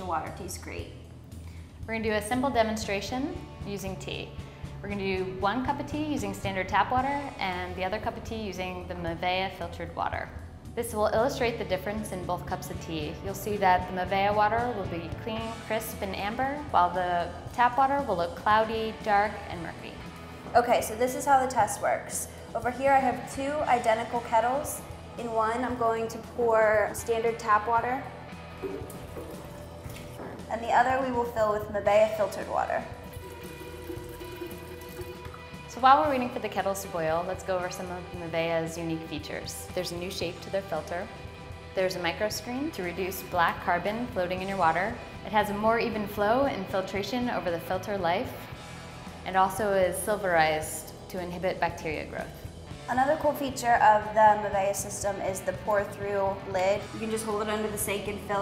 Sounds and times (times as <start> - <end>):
Music: 0.0 - 58.4
Speech: 20.6 - 28.0, 30.5 - 32.9, 49.3 - 58.4.